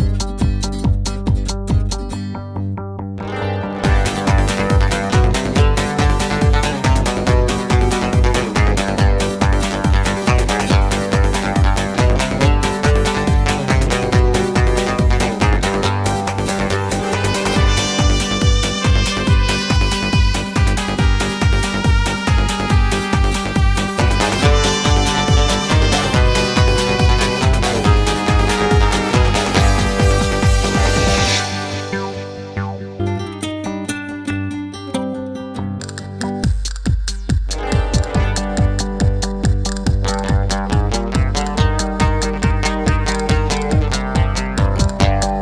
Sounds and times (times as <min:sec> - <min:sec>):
Blues: 0:00.0 - 0:45.4
Rhythm and blues: 0:00.0 - 0:45.4
Jingle (music): 0:03.2 - 0:11.1, 0:11.8 - 0:33.2, 0:37.6 - 0:39.7.